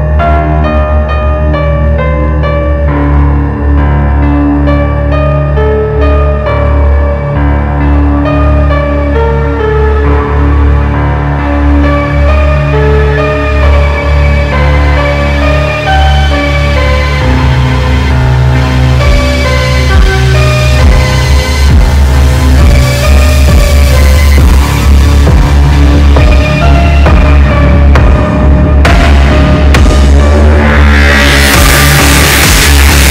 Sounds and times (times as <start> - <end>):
Dubstep: 11.4 - 33.1.